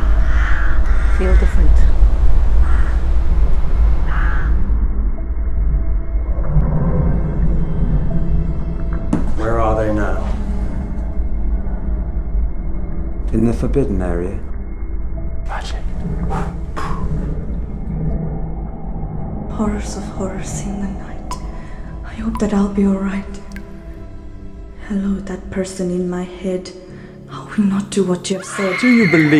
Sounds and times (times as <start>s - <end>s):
Music: 0.0s - 29.4s.